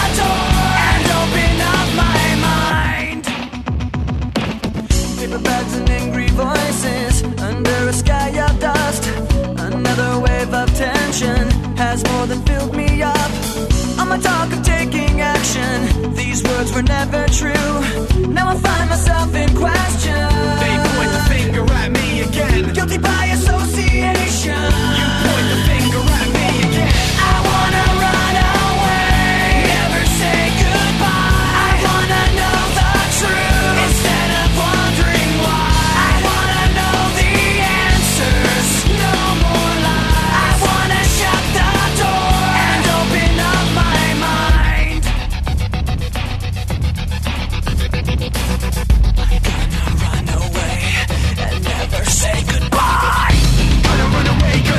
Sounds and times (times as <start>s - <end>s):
Music: 0.0s - 54.7s.